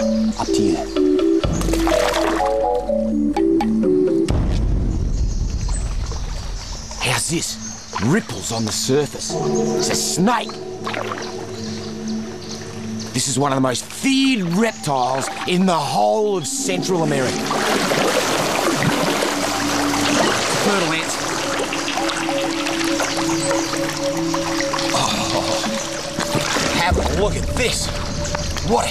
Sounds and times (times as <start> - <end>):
Music: 0.0 - 28.9.